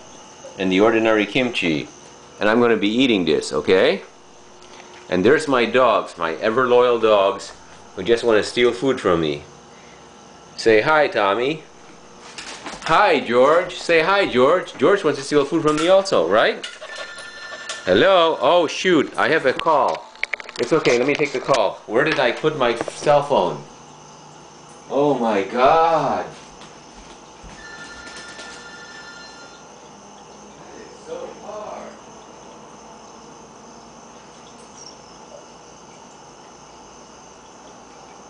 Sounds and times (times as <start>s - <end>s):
Speech: 0.6s - 4.1s, 5.1s - 9.5s, 10.6s - 11.6s, 12.9s - 16.6s, 17.9s - 20.0s, 20.6s - 23.7s, 24.9s - 26.4s, 30.6s - 32.0s.